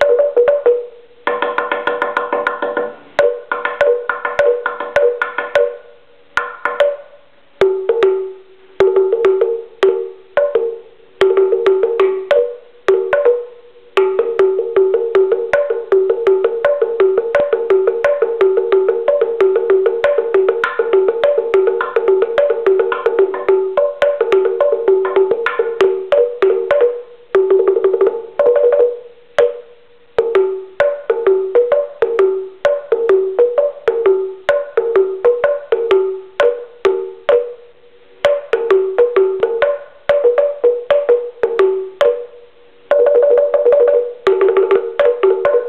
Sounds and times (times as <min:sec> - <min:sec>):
Percussion: 0:00.0 - 0:45.6.